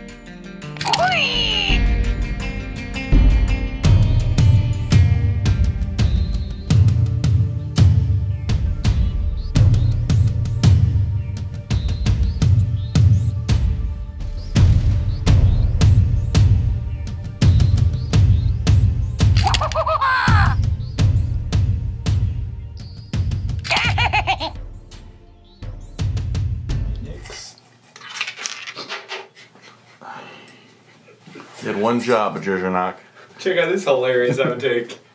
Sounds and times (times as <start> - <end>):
Music: 0.0 - 27.4
Speech: 0.8 - 1.8, 31.6 - 35.0.